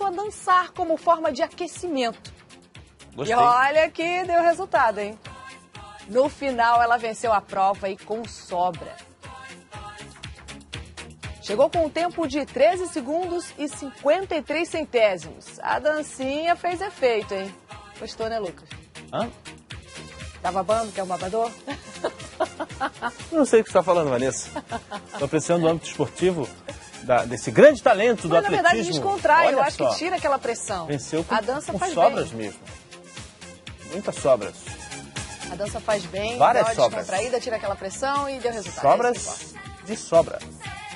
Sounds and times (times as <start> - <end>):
Music: 0.0 - 40.9.